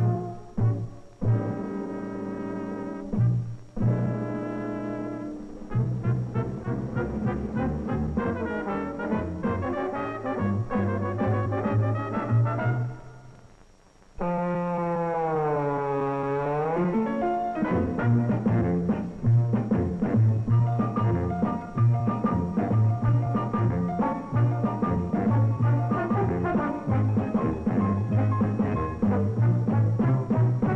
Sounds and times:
Music: 0.0s - 30.7s.

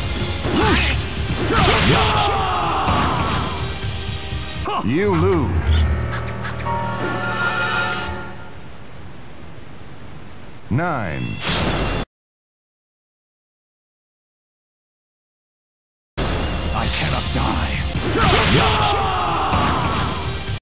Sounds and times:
Music: 0.0s - 8.7s, 16.2s - 20.6s
Male speech, man speaking: 4.6s - 5.6s, 10.7s - 11.4s, 16.8s - 19.0s.

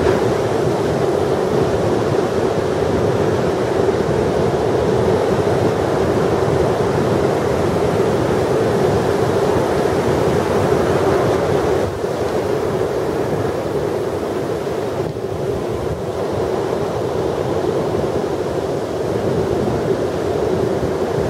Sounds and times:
Waves, surf: 0.0s - 21.2s
Wind noise (microphone): 0.0s - 21.2s.

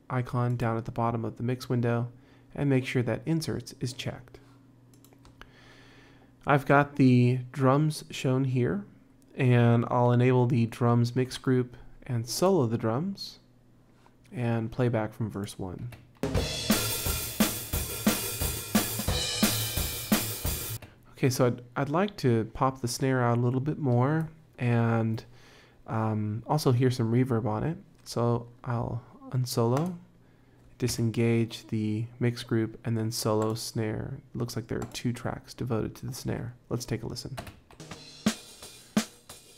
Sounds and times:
Speech: 0.0s - 4.4s, 6.4s - 13.5s, 14.3s - 16.0s, 21.1s - 25.3s, 25.9s - 30.1s, 30.8s - 37.5s
Music: 16.2s - 20.8s, 37.8s - 39.5s.

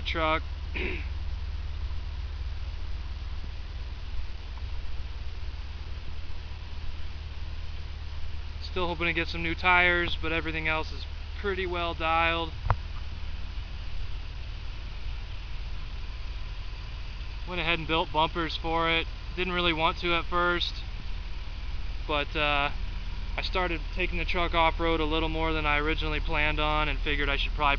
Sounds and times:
Speech: 0.0s - 1.1s, 8.6s - 12.6s, 17.5s - 20.9s, 22.1s - 22.8s, 23.4s - 27.7s
Vehicle: 0.0s - 27.7s.

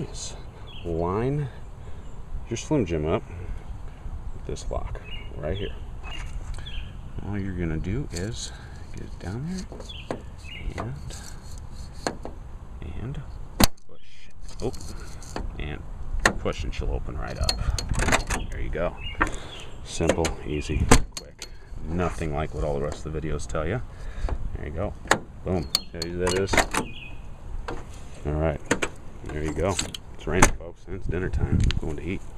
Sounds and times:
Speech: 0.0s - 1.6s, 2.5s - 3.3s, 4.4s - 5.8s, 7.2s - 9.7s, 10.7s - 11.2s, 12.8s - 13.3s, 13.9s - 15.0s, 15.6s - 15.8s, 16.4s - 17.6s, 18.5s - 19.0s, 19.9s - 23.9s, 24.5s - 26.6s, 28.2s - 28.6s, 29.2s - 32.3s.

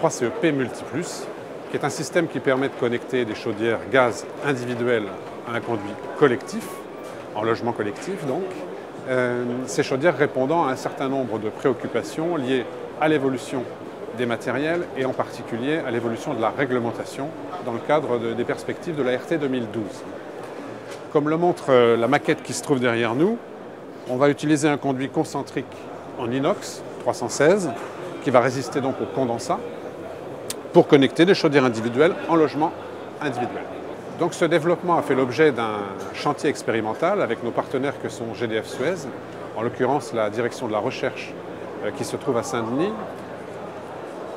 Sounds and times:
Speech: 0.0s - 20.1s, 21.1s - 23.4s, 24.1s - 29.7s, 30.7s - 43.2s.

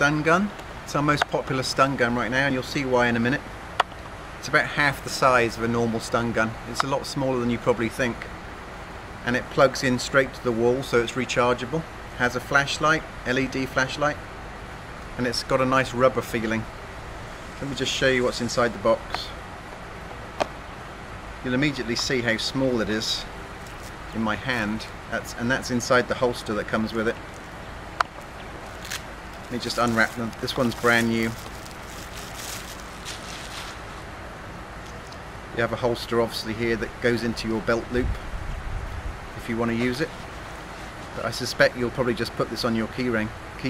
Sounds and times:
Speech: 0.0s - 3.5s, 4.4s - 8.3s, 9.2s - 14.2s, 15.2s - 16.7s, 17.6s - 19.4s, 21.4s - 23.3s, 24.1s - 27.2s, 29.5s - 31.4s, 35.6s - 38.2s, 39.4s - 40.2s, 41.1s - 43.7s.

